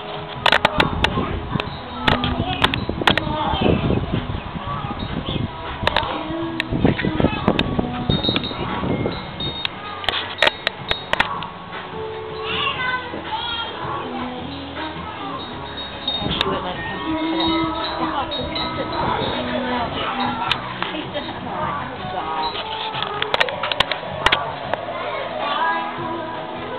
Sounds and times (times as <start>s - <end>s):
Music: 0.0s - 26.7s.